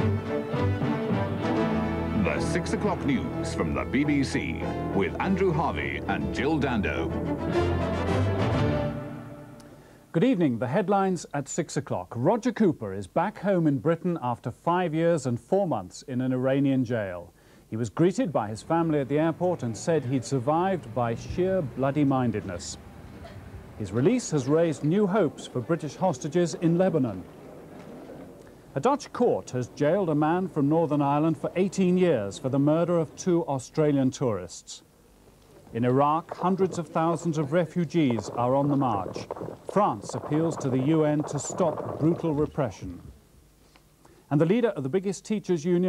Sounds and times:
Speech: 2.2 - 7.1, 10.1 - 22.8, 23.8 - 27.3, 28.8 - 34.9, 35.7 - 43.1, 44.3 - 45.8.

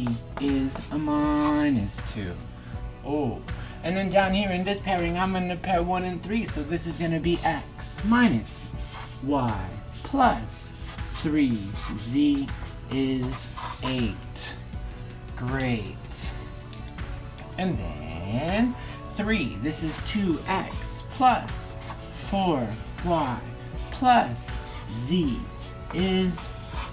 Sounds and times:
Speech: 0.0 - 2.4, 3.0 - 14.6, 15.4 - 16.4, 17.6 - 26.5
Music: 0.0 - 26.9.

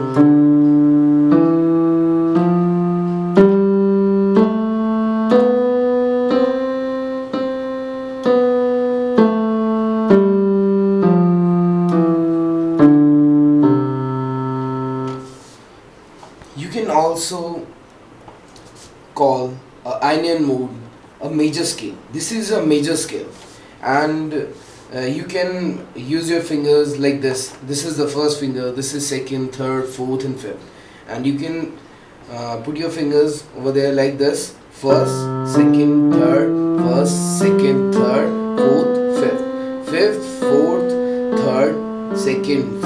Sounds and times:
Speech: 16.6 - 17.7, 19.2 - 42.8.

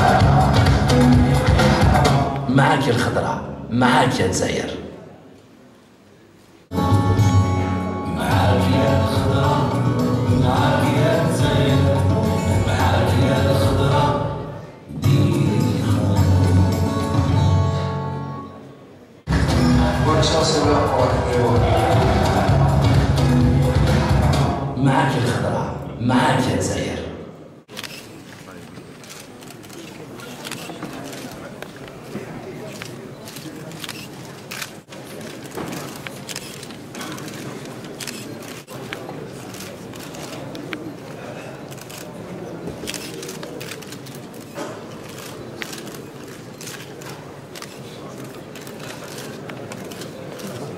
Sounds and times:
Music: 0.0 - 2.5, 6.7 - 18.7, 19.3 - 24.8
Speech: 2.4 - 5.2, 19.8 - 22.2, 24.7 - 34.0.

